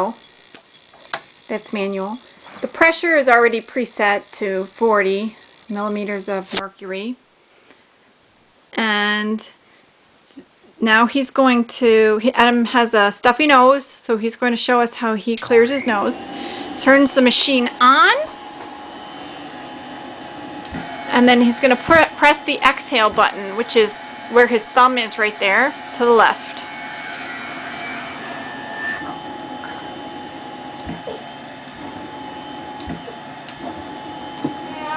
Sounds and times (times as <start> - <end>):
Speech: 1.5 - 7.2, 8.8 - 9.6, 10.8 - 18.3, 21.1 - 26.6.